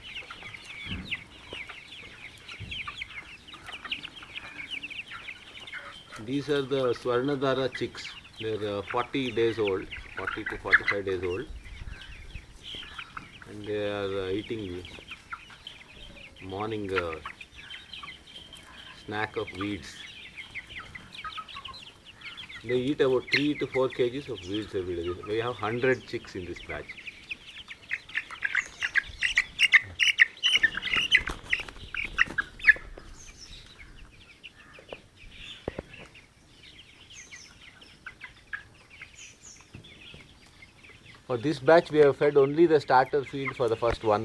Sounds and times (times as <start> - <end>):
Chirp, tweet: 0.0 - 44.2.